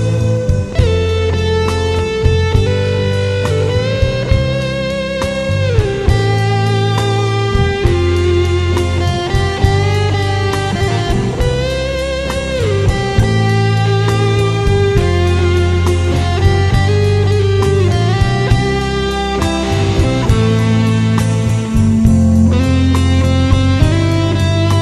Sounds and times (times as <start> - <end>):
Music: 0.0 - 24.8.